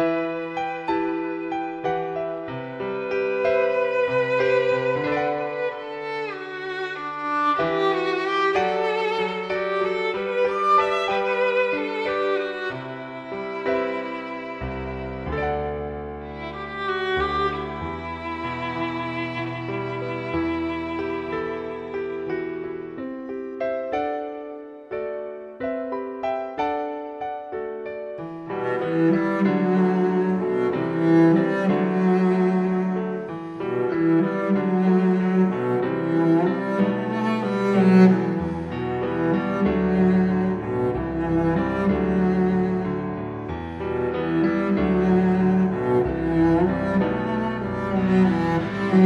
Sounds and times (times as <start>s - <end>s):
Music: 0.0s - 49.0s.